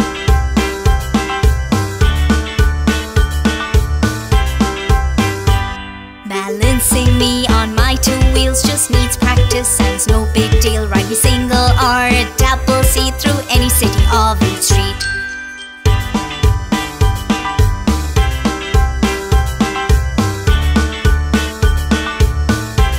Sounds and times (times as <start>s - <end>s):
Music: 0.0s - 22.9s.